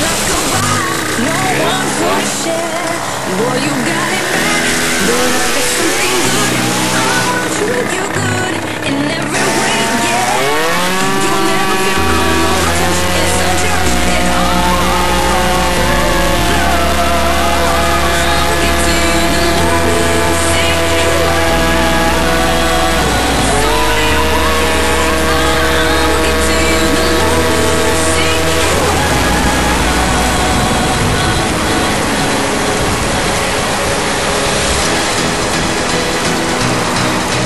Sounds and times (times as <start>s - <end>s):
Motorcycle: 0.0s - 37.4s.